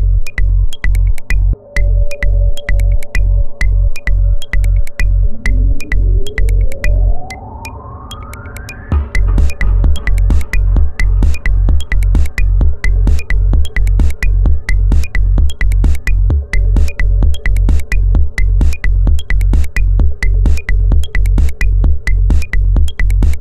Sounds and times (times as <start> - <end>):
Techno: 0.0 - 23.4.